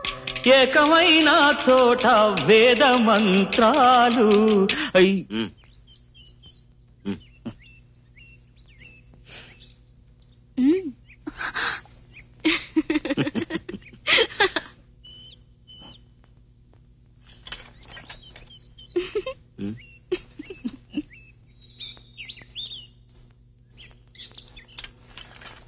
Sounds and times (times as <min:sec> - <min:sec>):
Outside, rural or natural: 0:00.0 - 0:16.1, 0:16.9 - 0:25.6.